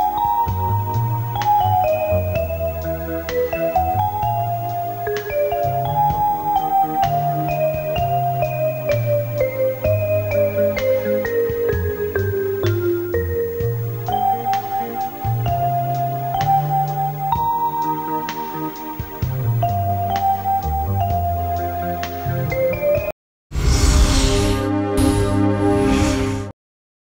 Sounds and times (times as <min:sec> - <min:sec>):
Music: 0:00.0 - 0:23.2.